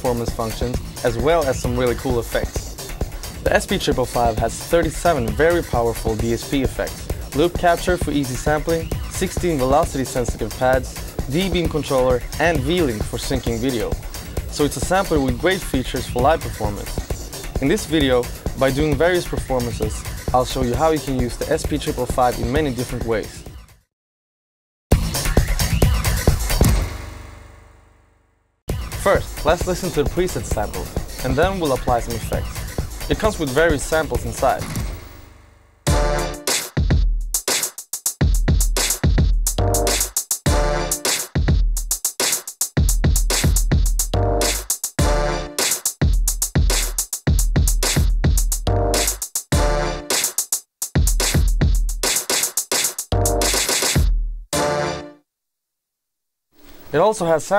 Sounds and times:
Speech: 0.0 - 2.7, 3.4 - 23.4, 29.0 - 34.7, 56.9 - 57.5
Music: 0.0 - 23.9, 24.9 - 55.3.

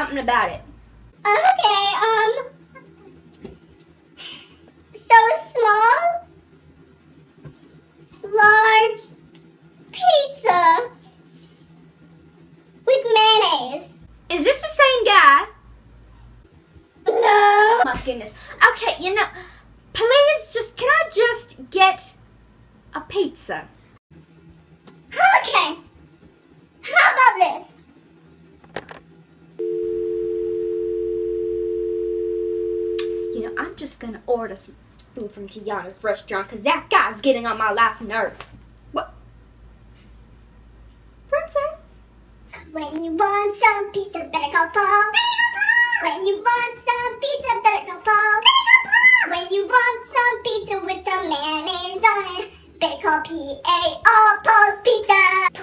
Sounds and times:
Speech: 0.0 - 0.7, 8.2 - 9.2, 12.9 - 15.6, 17.2 - 19.4, 20.0 - 22.2, 22.9 - 23.8, 25.1 - 25.9, 26.8 - 27.9, 33.3 - 39.2, 41.3 - 41.9, 42.6 - 48.7.

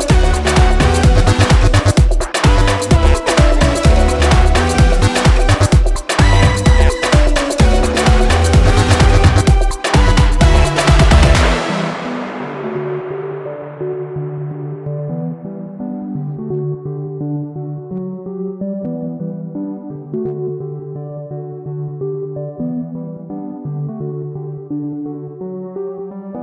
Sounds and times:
Music: 0.0 - 26.4.

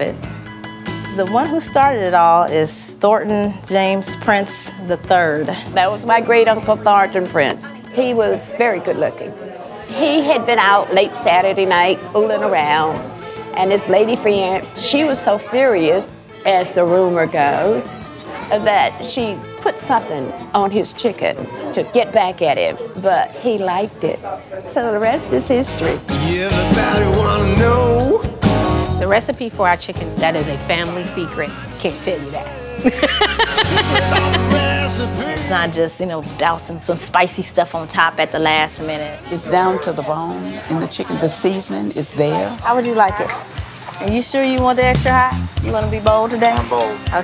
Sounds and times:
Music: 0.0 - 47.2.

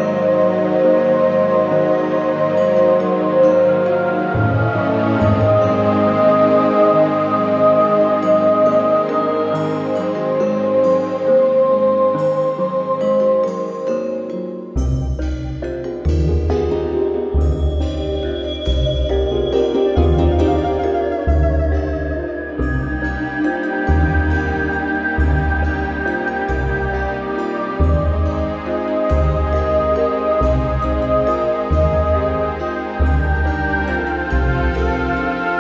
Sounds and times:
Glockenspiel: 0.0 - 35.6
Marimba, xylophone: 8.3 - 35.6.

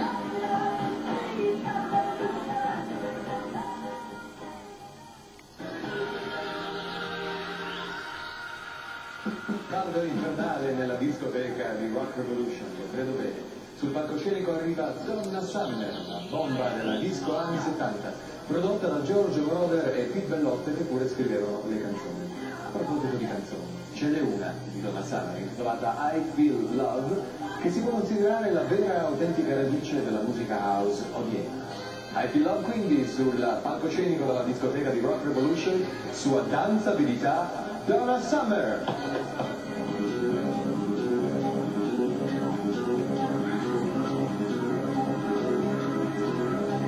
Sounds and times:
Music: 0.0 - 46.8
Speech: 9.7 - 39.6.

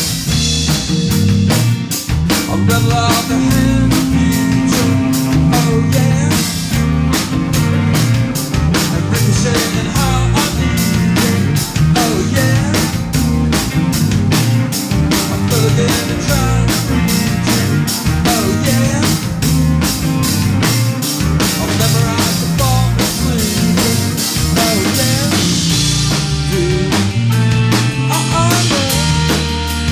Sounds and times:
Bass drum: 0.0 - 29.9
Drum kit: 0.0 - 29.9.

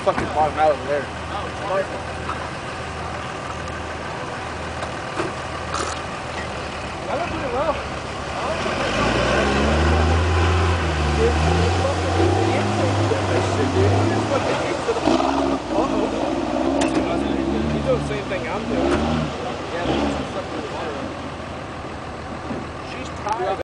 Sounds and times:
Speech: 0.0 - 2.2, 7.0 - 10.3, 11.1 - 21.2, 22.8 - 23.6.

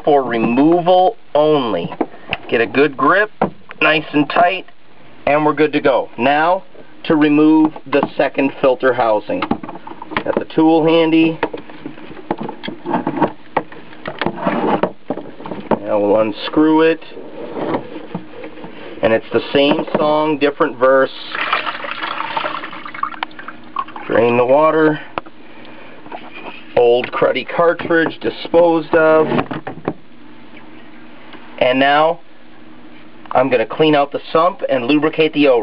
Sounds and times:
Speech: 0.0 - 9.5, 10.2 - 11.4, 15.8 - 17.2, 19.0 - 21.4, 24.1 - 25.1, 26.8 - 29.4, 31.6 - 32.2, 33.3 - 35.6
Water: 21.1 - 24.8.

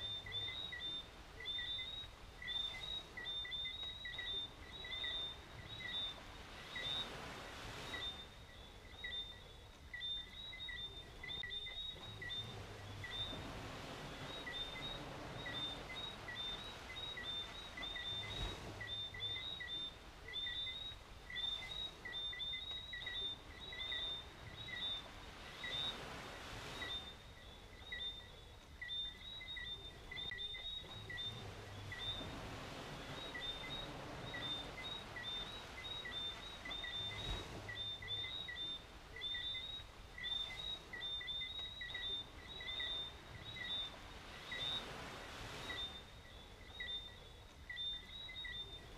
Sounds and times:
Bird: 0.0 - 48.9.

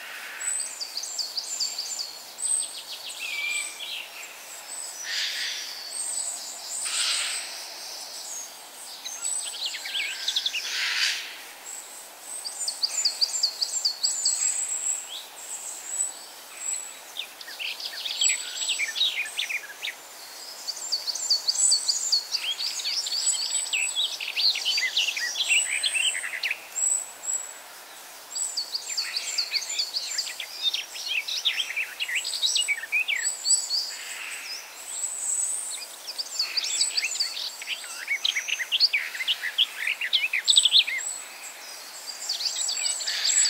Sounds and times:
Chirp, tweet: 0.0 - 10.7, 12.4 - 27.5, 28.4 - 43.4.

